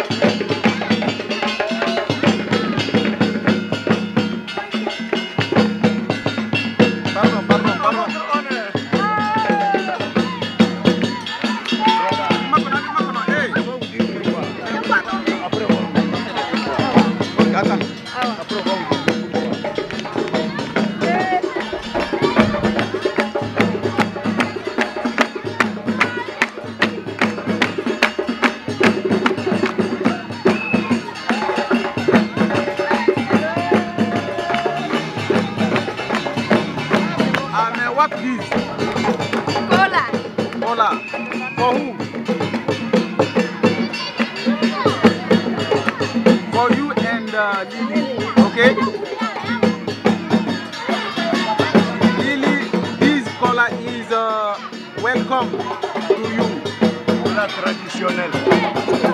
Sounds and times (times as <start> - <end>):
Tubular bells: 0.0 - 59.1.